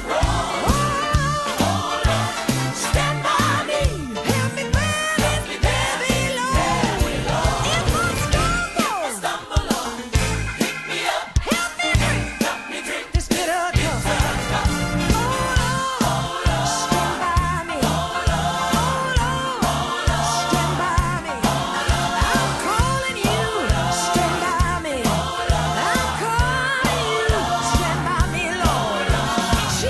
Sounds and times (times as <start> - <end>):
Singing: 0.0 - 10.1, 10.9 - 29.9
Soul music: 0.0 - 29.9.